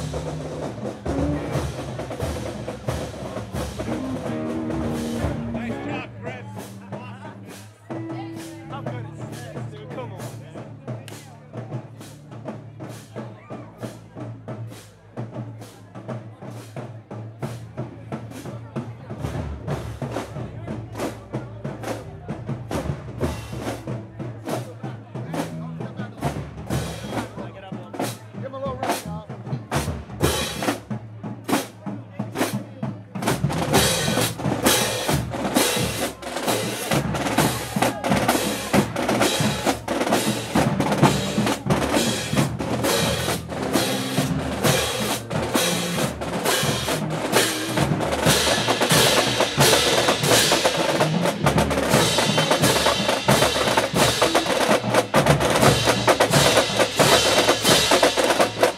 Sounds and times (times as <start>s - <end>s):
Music: 0.0s - 58.7s
Speech: 3.0s - 55.0s.